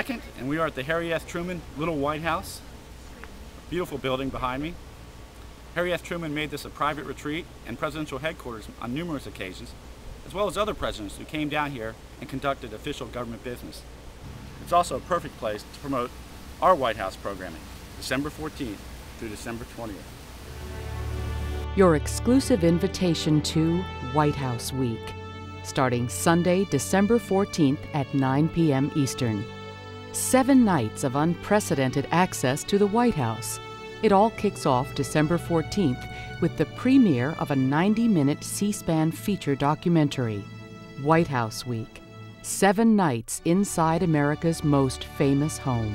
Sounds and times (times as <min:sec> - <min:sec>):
Music: 0:00.0 - 0:02.6, 0:14.2 - 0:16.1, 0:20.4 - 0:45.9
Speech: 0:00.0 - 0:02.6, 0:03.7 - 0:04.8, 0:05.8 - 0:13.8, 0:14.7 - 0:20.0, 0:21.8 - 0:25.1, 0:25.7 - 0:29.4, 0:30.2 - 0:40.4, 0:41.0 - 0:45.9.